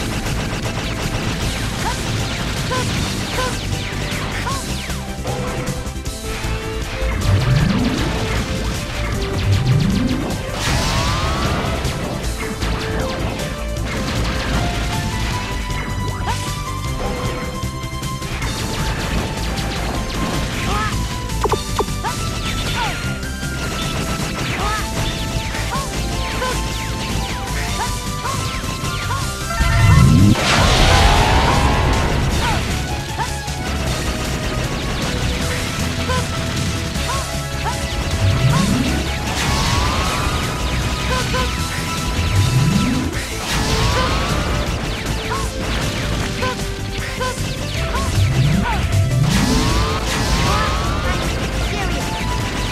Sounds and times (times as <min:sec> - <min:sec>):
Music: 0:00.0 - 0:52.7.